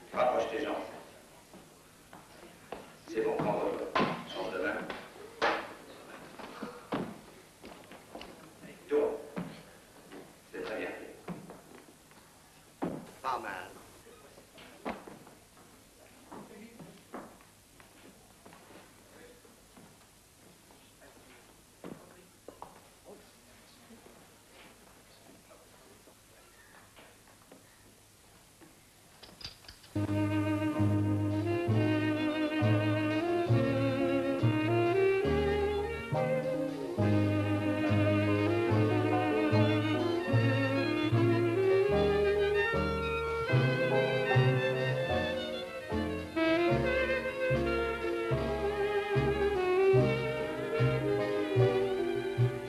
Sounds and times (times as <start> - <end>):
Music: 30.0 - 52.6.